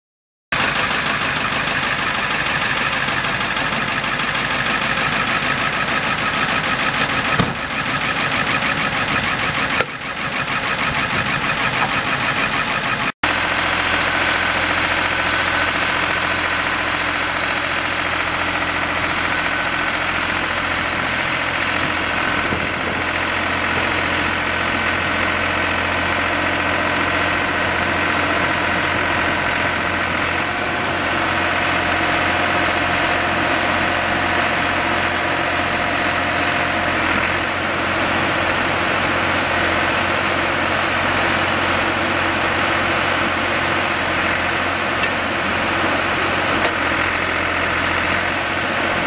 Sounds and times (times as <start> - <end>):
Idling: 0.6 - 49.0
Truck: 0.6 - 49.0.